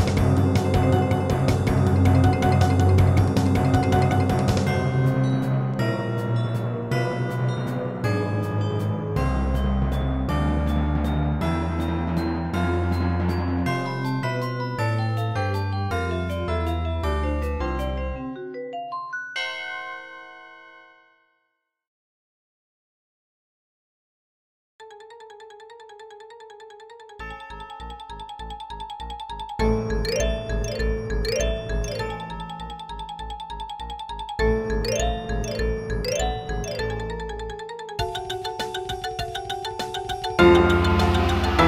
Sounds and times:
Marimba, xylophone: 0.0s - 11.2s, 24.9s - 41.6s
Glockenspiel: 0.0s - 21.6s, 24.8s - 41.6s.

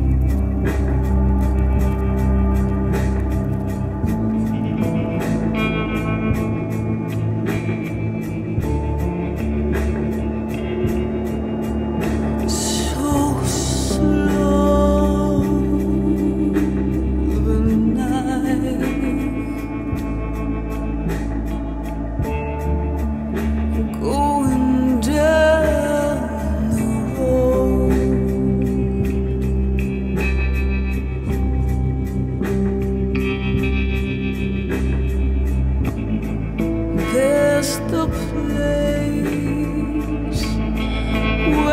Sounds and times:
Music: 0.0s - 41.7s.

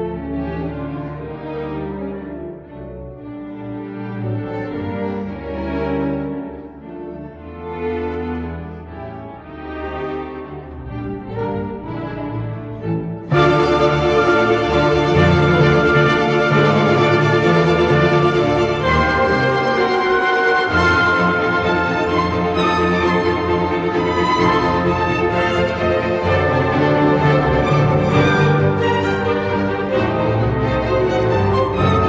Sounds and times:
Violin, fiddle: 0.0s - 32.0s.

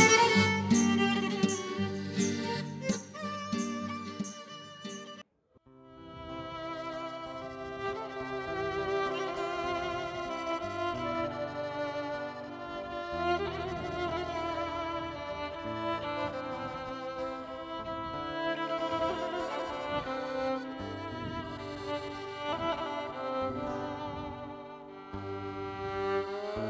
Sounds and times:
Music: 0.0s - 26.7s.

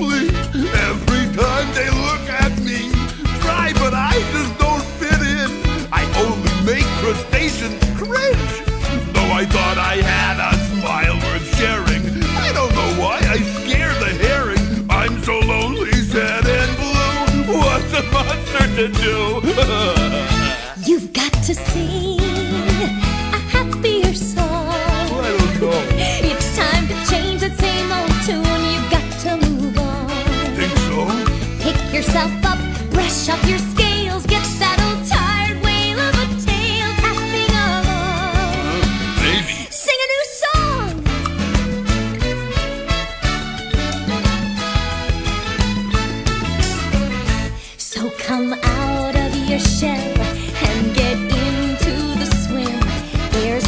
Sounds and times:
Singing: 0.0s - 7.7s, 9.0s - 23.0s, 23.6s - 39.7s
Music: 0.0s - 53.6s
Speech: 0.8s - 22.9s, 23.5s - 27.1s, 30.5s - 31.3s, 38.6s - 41.1s.

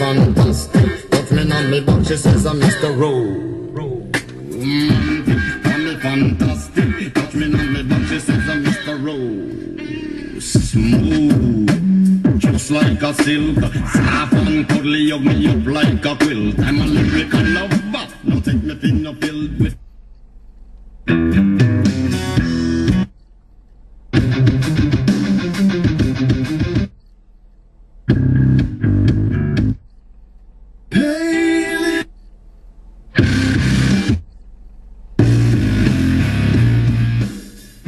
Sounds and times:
Music: 0.1s - 2.9s, 4.1s - 9.0s, 9.6s - 19.8s, 21.1s - 23.1s, 24.2s - 26.9s, 28.1s - 29.8s, 33.2s - 34.2s, 35.2s - 37.8s.

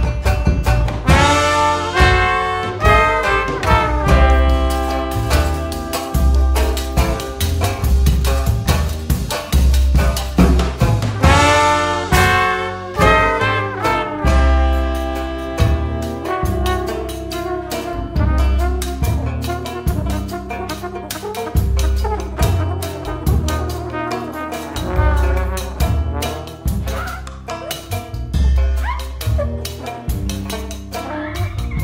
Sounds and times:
Music: 0.0s - 31.8s.

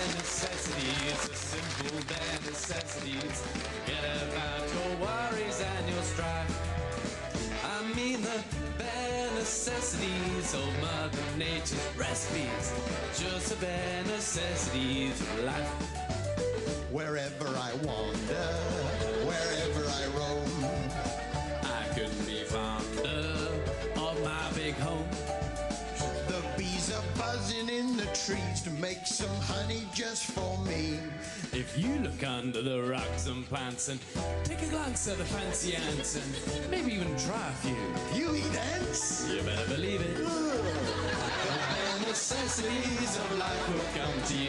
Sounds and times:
Male singing: 0.0s - 6.8s, 7.5s - 16.0s, 16.9s - 21.0s, 21.6s - 25.3s, 26.0s - 44.4s
Music: 0.0s - 44.4s.

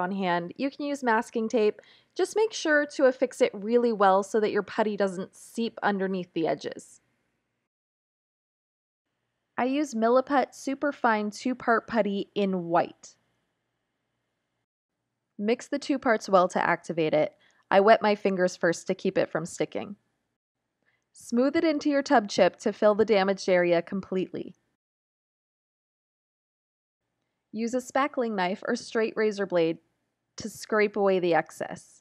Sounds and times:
Speech: 0.0s - 7.0s, 9.6s - 13.2s, 15.4s - 20.0s, 21.2s - 24.6s, 27.6s - 29.8s, 30.4s - 32.0s.

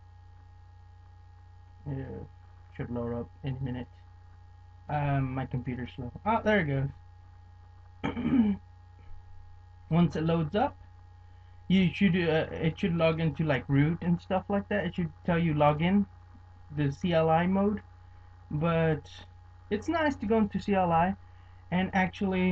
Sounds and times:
Speech: 1.9s - 3.9s, 4.9s - 7.0s, 8.1s - 8.6s, 9.9s - 10.8s, 11.7s - 16.1s, 16.7s - 17.8s, 18.5s - 22.5s.

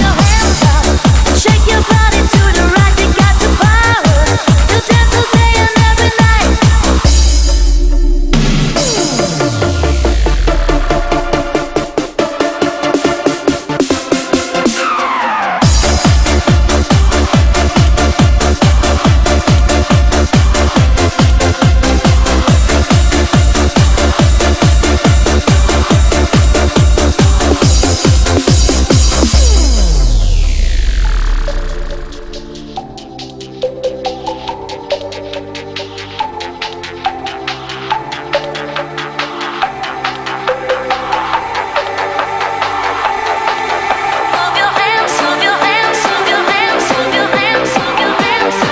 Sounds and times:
Dubstep: 0.0s - 48.7s
Electronic dance music: 0.0s - 48.7s
Electronica: 0.0s - 48.7s
Techno: 0.0s - 48.7s.

